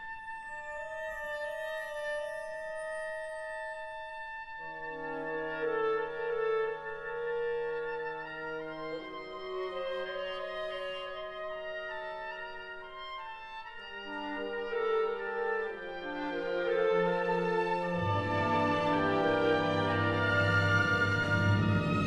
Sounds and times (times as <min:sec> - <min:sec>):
Music: 0:00.0 - 0:22.0.